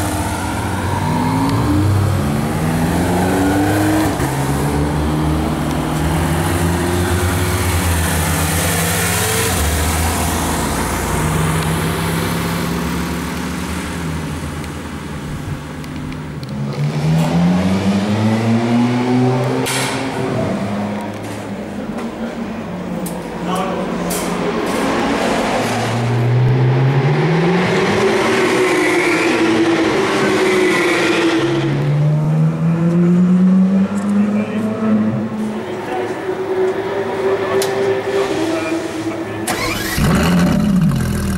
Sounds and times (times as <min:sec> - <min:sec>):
Outside, urban or manmade: 0:00.0 - 0:41.3
Race car, auto racing: 0:00.0 - 0:41.3.